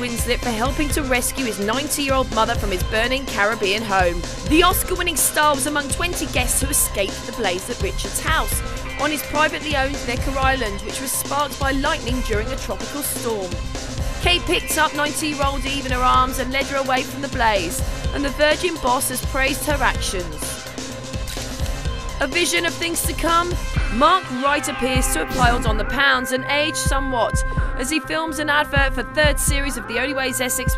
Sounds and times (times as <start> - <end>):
Speech: 0.0 - 13.6, 14.2 - 20.6, 22.2 - 30.7
Music: 0.0 - 30.7.